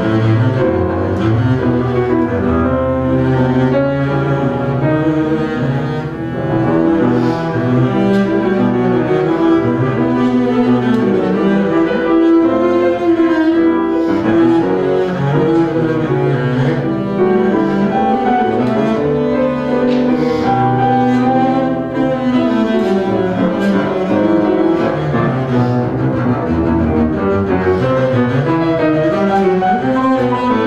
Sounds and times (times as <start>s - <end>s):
Bowed string instrument: 0.0s - 30.6s.